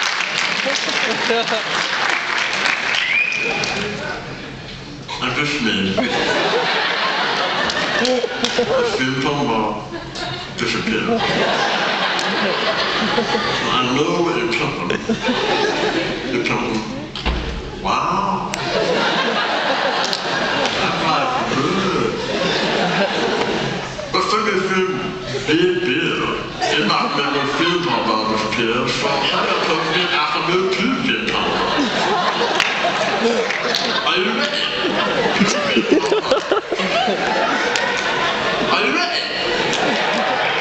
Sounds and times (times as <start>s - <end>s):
Speech: 5.1s - 6.2s, 8.6s - 9.9s, 10.6s - 11.3s, 13.6s - 15.1s, 16.3s - 17.2s, 17.8s - 18.6s, 20.7s - 22.2s, 24.1s - 31.7s, 33.2s - 35.9s, 38.6s - 39.5s.